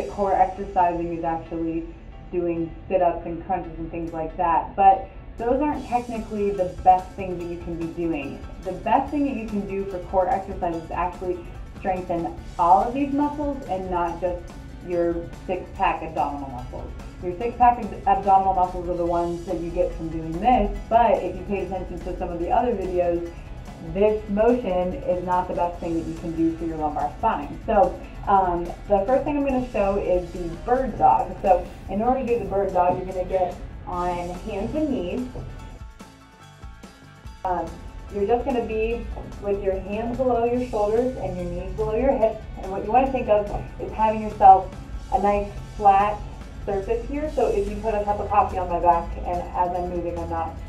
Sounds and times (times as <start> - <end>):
Speech: 0.0 - 1.8, 2.4 - 35.4, 37.5 - 50.6
Music: 0.0 - 50.6.